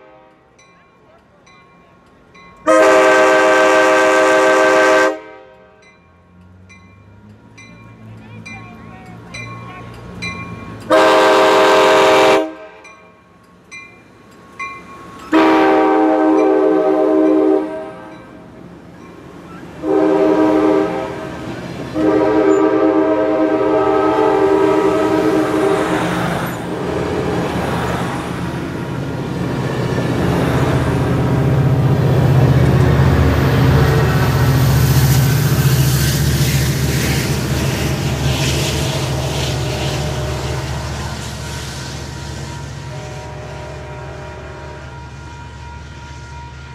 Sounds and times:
Train whistle: 0:00.0 - 0:00.5, 0:02.7 - 0:05.8, 0:10.9 - 0:12.9, 0:15.3 - 0:18.2, 0:19.8 - 0:26.2, 0:35.0 - 0:46.7
Railroad car, train wagon: 0:00.0 - 0:46.7
Speech: 0:00.8 - 0:02.1, 0:07.9 - 0:10.0.

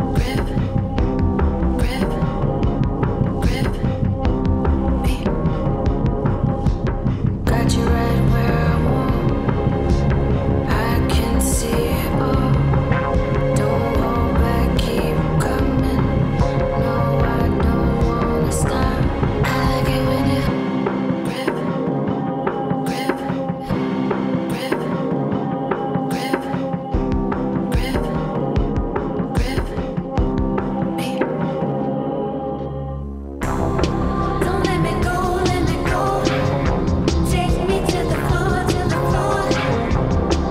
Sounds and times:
Music: 0:00.0 - 0:40.5
Singing: 0:03.3 - 0:04.0, 0:07.5 - 0:23.8, 0:33.4 - 0:40.5.

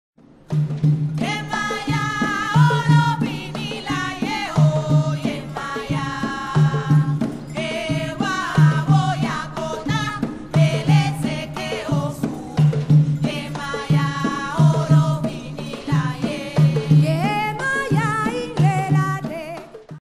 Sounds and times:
Percussion: 0:00.2 - 0:20.0.

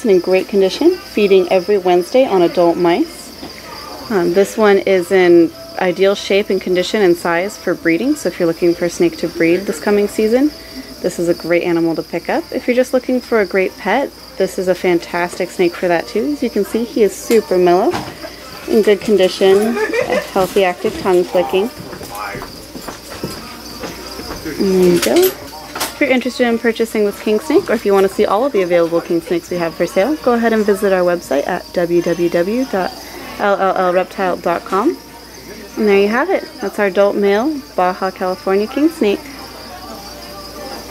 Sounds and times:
Speech: 0:00.0 - 0:18.0, 0:18.7 - 0:22.5, 0:24.5 - 0:40.9
Inside, public space: 0:00.0 - 0:40.9
Music: 0:00.0 - 0:40.9.

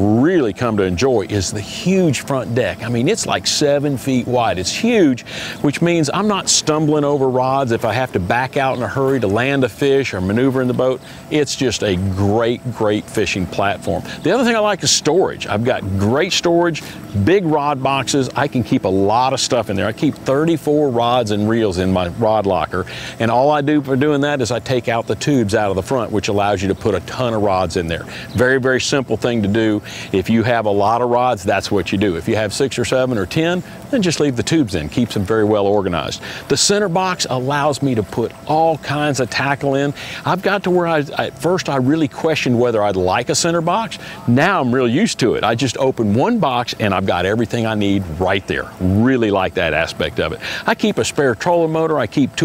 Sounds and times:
Speech: 0:00.0 - 0:52.4.

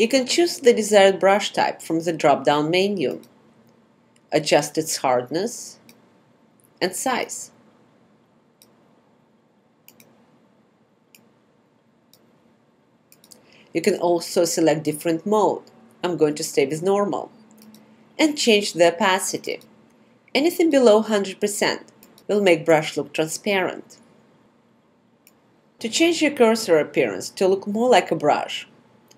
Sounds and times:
Speech: 0:00.0 - 0:03.2, 0:04.3 - 0:05.9, 0:06.8 - 0:07.6, 0:13.8 - 0:17.4, 0:18.2 - 0:19.7, 0:20.3 - 0:24.0, 0:25.8 - 0:28.8.

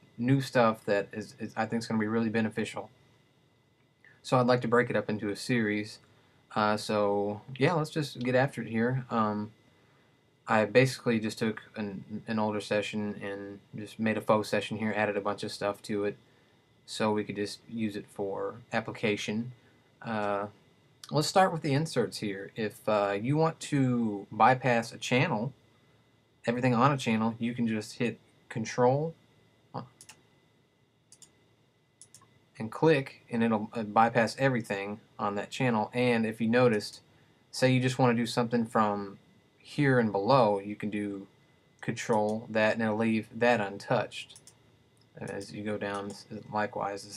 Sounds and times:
Speech: 0:00.2 - 0:02.9, 0:04.2 - 0:09.6, 0:10.5 - 0:16.2, 0:16.9 - 0:25.6, 0:26.5 - 0:29.2, 0:32.6 - 0:44.4, 0:45.2 - 0:47.1.

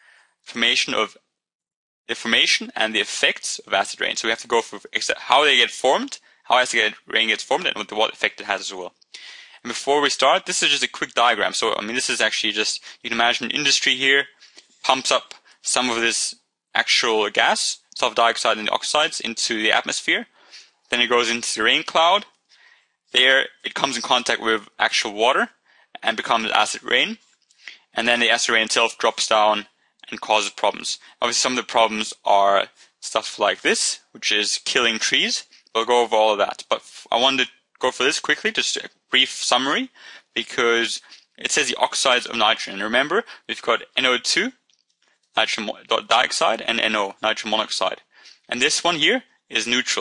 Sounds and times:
Speech: 0:00.5 - 0:01.2, 0:02.1 - 0:22.4, 0:23.1 - 0:44.6, 0:45.4 - 0:50.0.

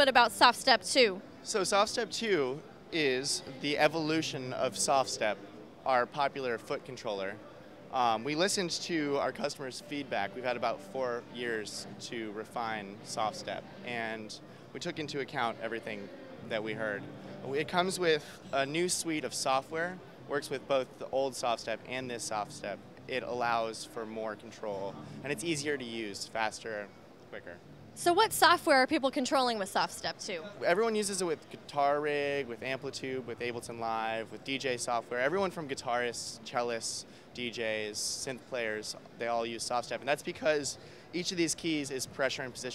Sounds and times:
Speech: 0:00.0 - 0:42.7.

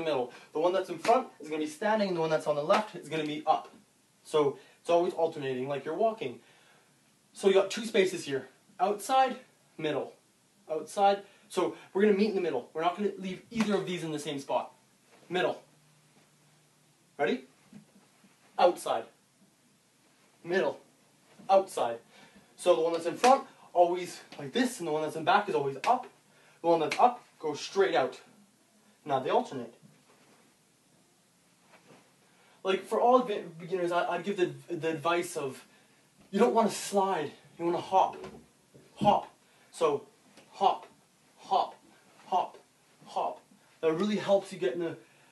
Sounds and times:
Speech: 0:00.0 - 0:06.4, 0:07.4 - 0:15.7, 0:17.2 - 0:17.5, 0:18.6 - 0:19.2, 0:20.4 - 0:20.8, 0:21.5 - 0:28.3, 0:29.0 - 0:29.8, 0:32.6 - 0:35.7, 0:36.3 - 0:38.4, 0:39.0 - 0:45.0.

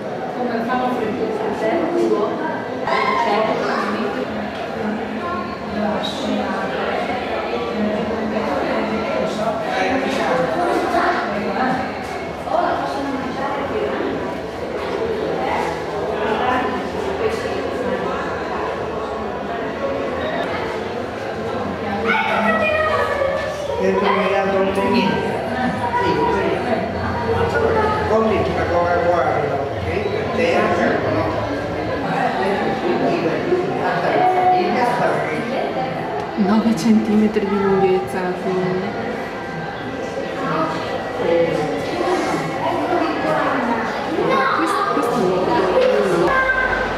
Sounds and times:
Speech: 0:00.0 - 0:39.2
Inside, large room or hall: 0:00.0 - 0:46.9.

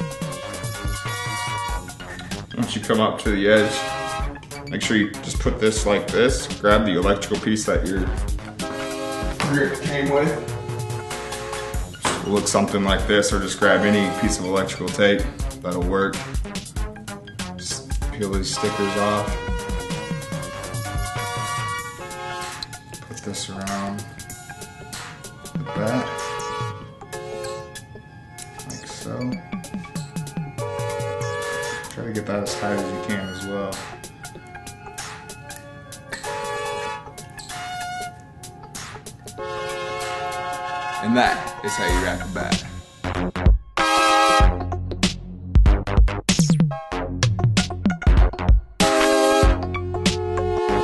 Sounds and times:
Drum machine: 0:19.3 - 0:21.8, 0:41.9 - 0:43.8, 0:44.4 - 0:50.8.

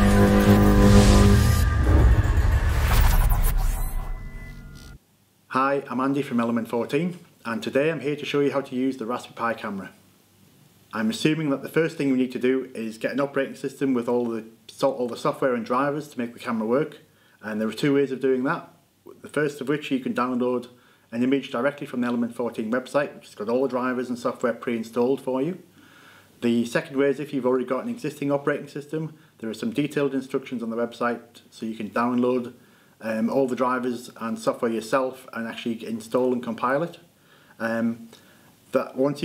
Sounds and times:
Speech: 0:05.5 - 0:10.0, 0:10.9 - 0:25.6, 0:26.4 - 0:38.1, 0:38.7 - 0:39.2.

